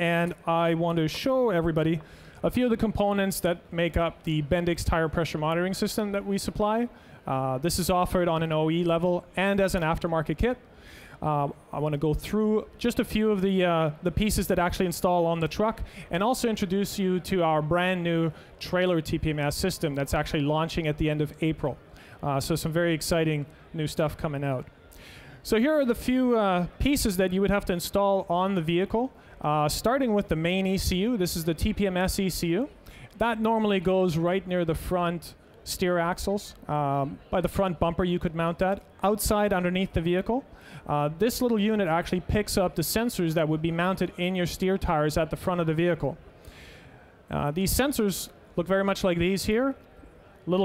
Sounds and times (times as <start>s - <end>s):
Speech: 0.0s - 10.6s, 11.2s - 24.8s, 25.4s - 46.2s, 47.3s - 50.6s.